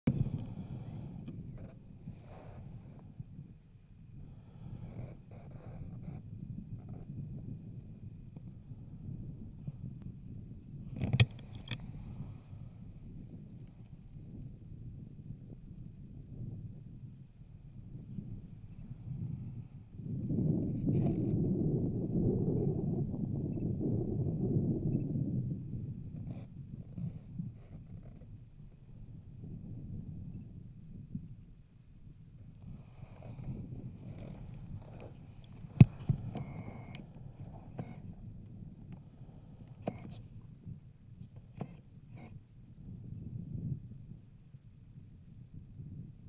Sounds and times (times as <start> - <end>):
Outside, rural or natural: 0.0 - 46.2.